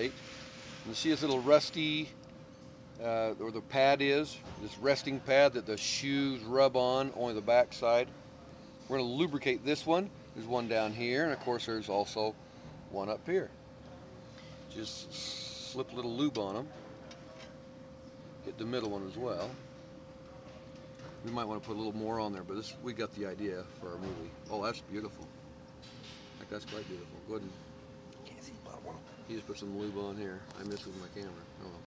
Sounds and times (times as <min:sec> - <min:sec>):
Speech: 0:00.9 - 0:02.1, 0:28.8 - 0:31.8.